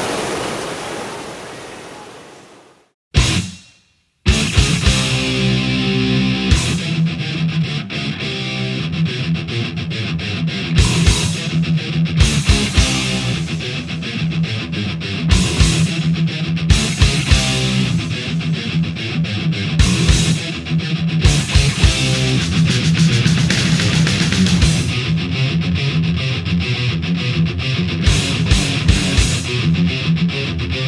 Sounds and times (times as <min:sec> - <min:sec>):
Music: 0:03.2 - 0:30.8.